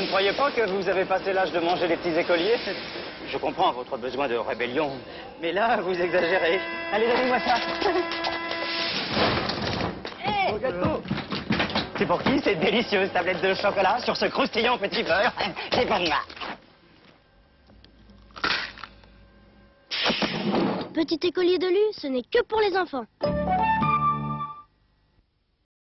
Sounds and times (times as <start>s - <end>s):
Music: 23.2s - 24.8s.